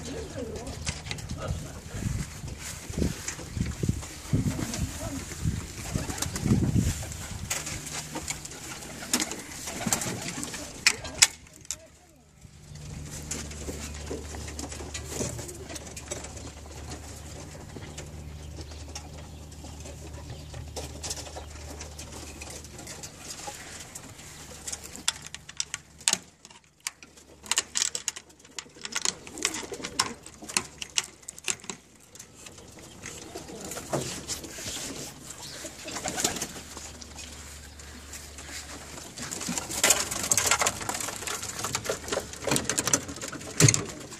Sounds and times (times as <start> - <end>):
Pigeon, dove: 0.0 - 44.2.